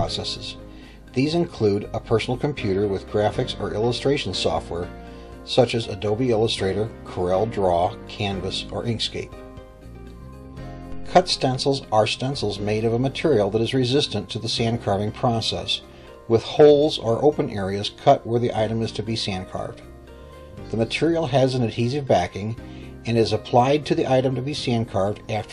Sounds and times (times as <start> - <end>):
Speech: 0.0 - 0.6, 1.2 - 4.9, 5.5 - 9.4, 11.1 - 19.8, 20.7 - 25.5
Music: 0.0 - 25.5.